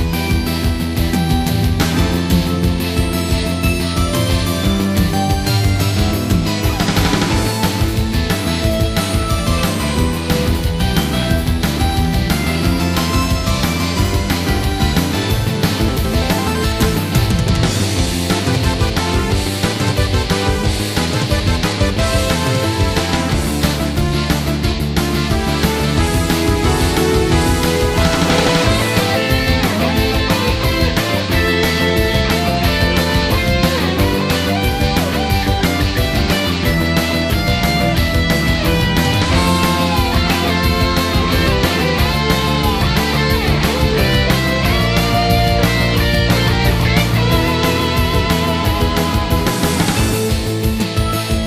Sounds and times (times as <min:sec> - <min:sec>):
Funk: 0:00.7 - 0:51.4.